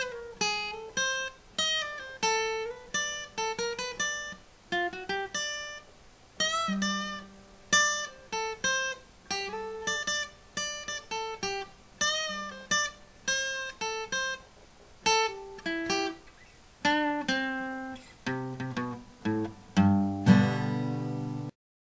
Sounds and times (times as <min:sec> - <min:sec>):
Strum: 0:15.1 - 0:21.5.